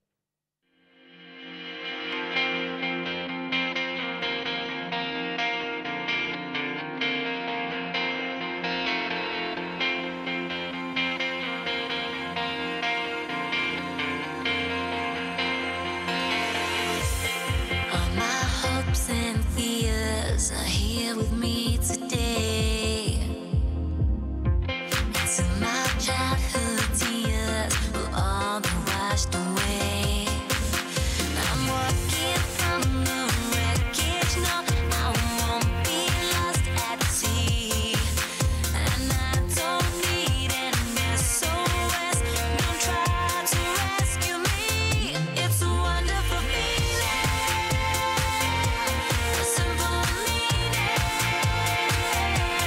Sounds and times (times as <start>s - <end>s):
Music: 0.7s - 52.6s
Female singing: 16.5s - 23.7s, 24.9s - 52.6s.